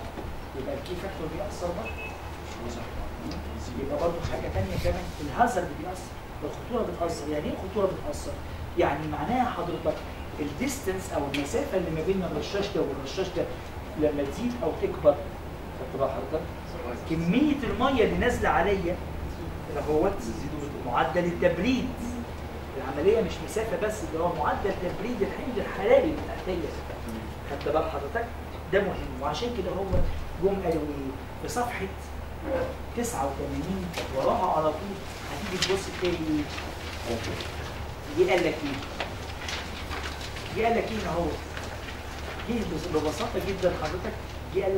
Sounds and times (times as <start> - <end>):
Speech: 0.6 - 15.3, 15.9 - 39.0, 40.5 - 41.5, 42.4 - 44.7.